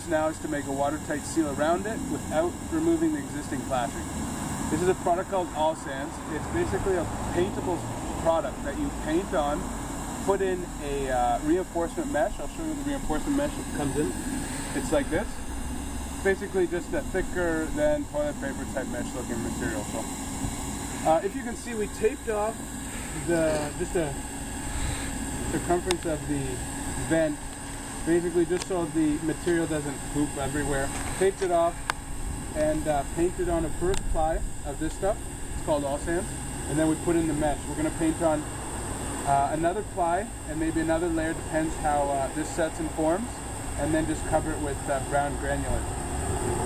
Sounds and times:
Speech: 0:00.0 - 0:04.0, 0:04.7 - 0:09.6, 0:10.2 - 0:14.2, 0:14.8 - 0:15.4, 0:16.3 - 0:20.1, 0:21.0 - 0:22.6, 0:23.2 - 0:24.2, 0:25.5 - 0:27.4, 0:28.0 - 0:31.8, 0:32.6 - 0:38.4, 0:39.2 - 0:45.9.

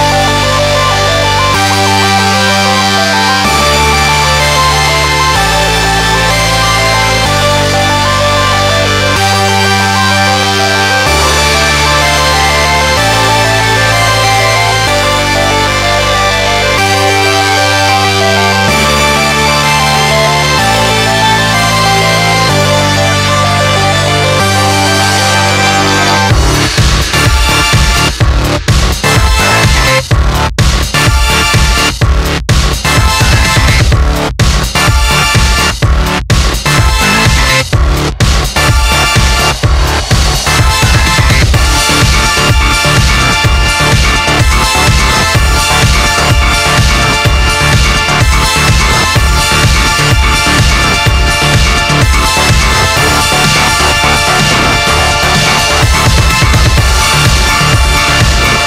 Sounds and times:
Music: 0:00.0 - 0:58.6.

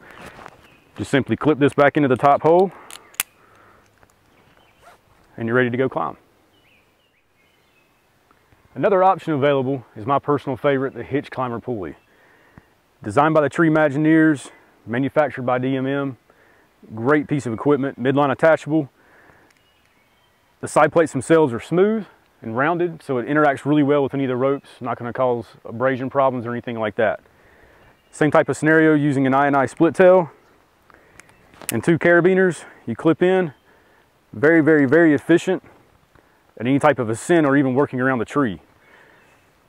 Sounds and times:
Environmental noise: 0:00.0 - 0:39.6.

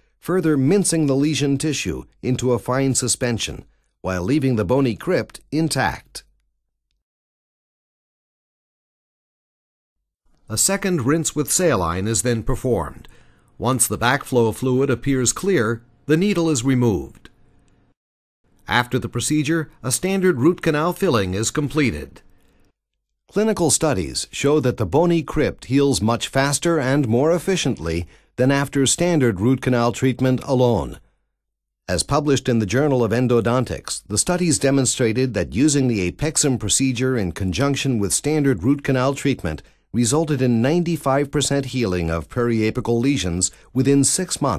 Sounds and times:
Narration, monologue: 0:00.0 - 0:07.0, 0:10.3 - 0:44.5.

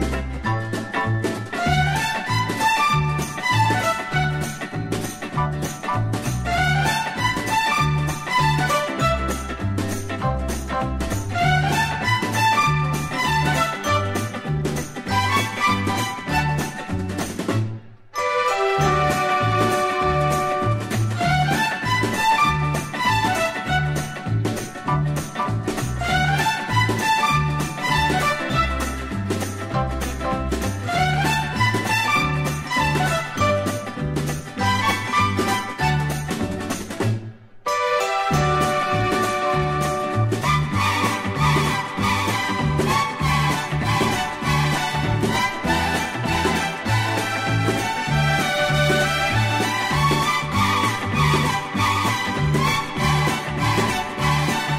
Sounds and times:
Music: 0:00.0 - 0:54.7.

